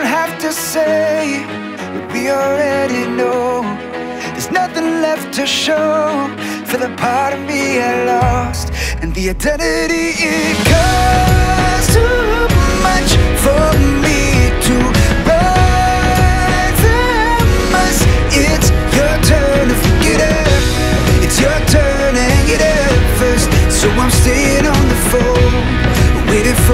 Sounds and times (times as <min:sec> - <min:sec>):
Music: 0:00.0 - 0:26.7.